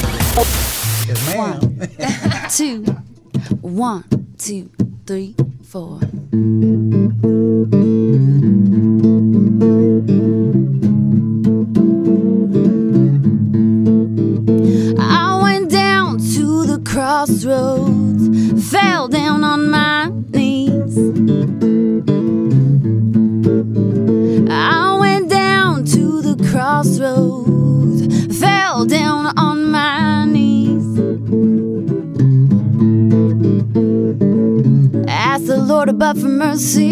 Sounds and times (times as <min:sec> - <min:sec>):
Acoustic guitar: 0:00.0 - 0:36.9
Strum: 0:00.0 - 0:36.9.